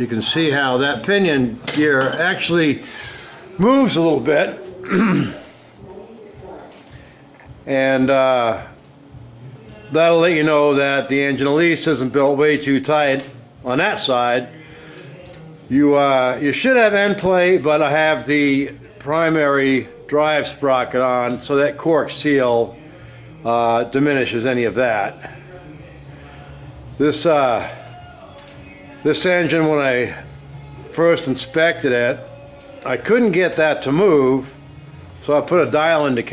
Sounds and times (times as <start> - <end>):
Speech: 0.0 - 2.9, 3.6 - 6.8, 7.6 - 8.7, 9.7 - 14.5, 15.7 - 22.8, 23.4 - 25.4, 27.0 - 27.8, 29.0 - 30.2, 30.9 - 34.6, 35.2 - 36.3.